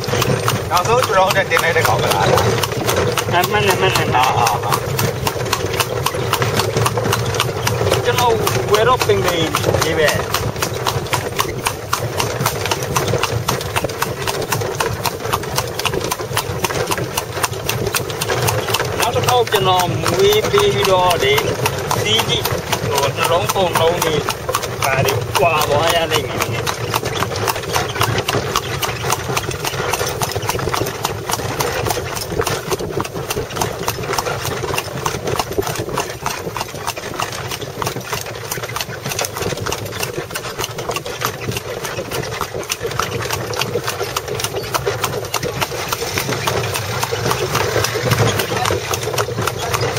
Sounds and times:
Clip-clop: 0.0 - 49.9.

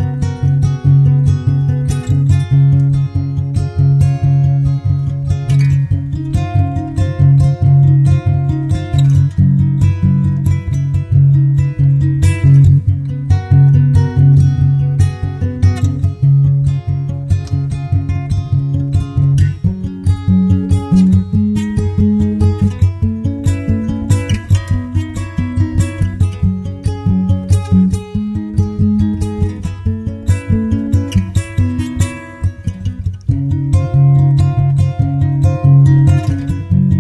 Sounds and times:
Music: 0.0 - 37.0.

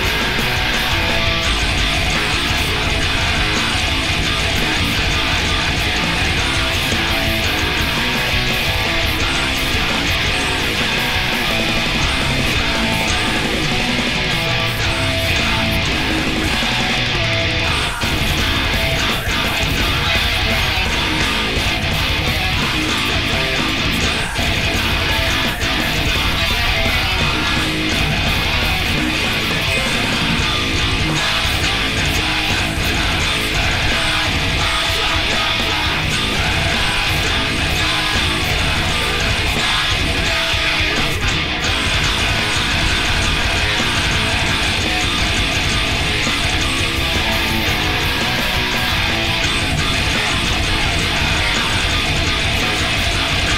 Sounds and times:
Guitar: 0.0 - 53.5.

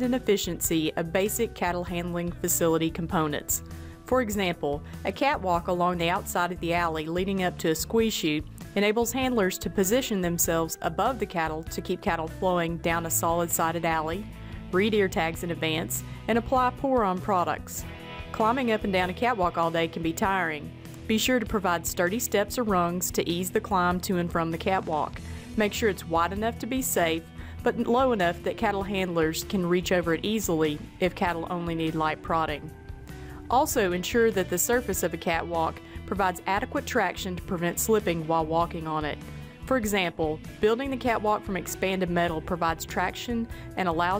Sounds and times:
Speech: 0.0 - 14.2, 14.8 - 17.8, 18.4 - 32.7, 33.5 - 44.1
Music: 0.0 - 44.1.

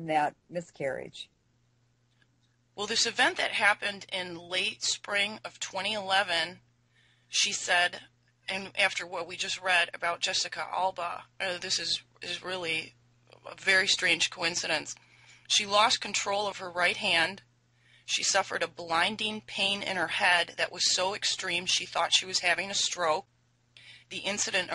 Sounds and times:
Speech: 0.0 - 1.3, 2.8 - 6.6, 7.4 - 12.9, 13.5 - 17.4, 18.1 - 23.2, 24.1 - 24.7.

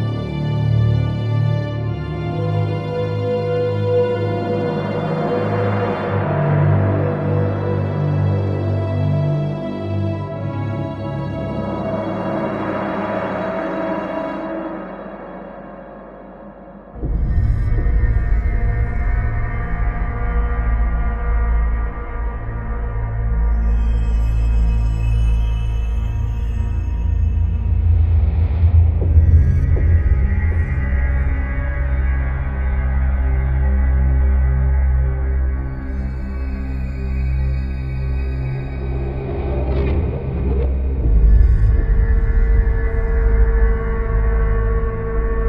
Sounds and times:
Scary music: 0.0 - 45.4.

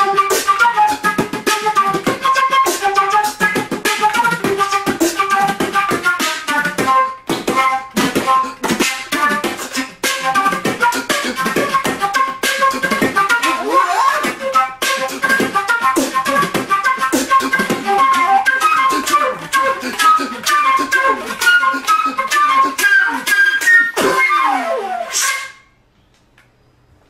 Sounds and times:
Flute: 0.0 - 25.8.

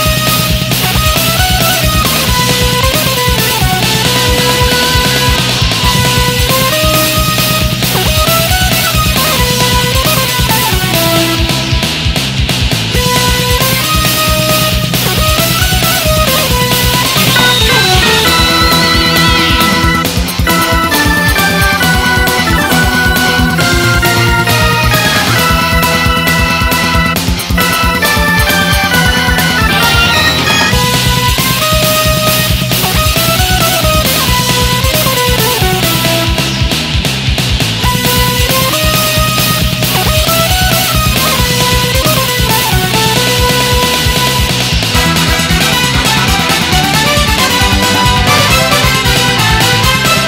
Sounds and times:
Music: 0.0 - 50.2.

